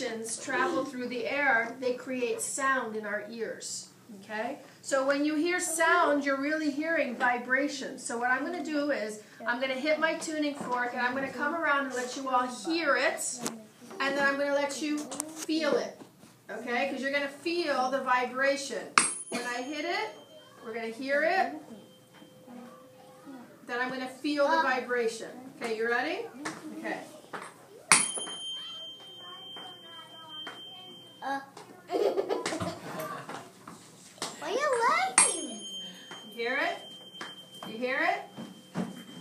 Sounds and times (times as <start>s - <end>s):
Tuning fork: 35.4s - 39.2s.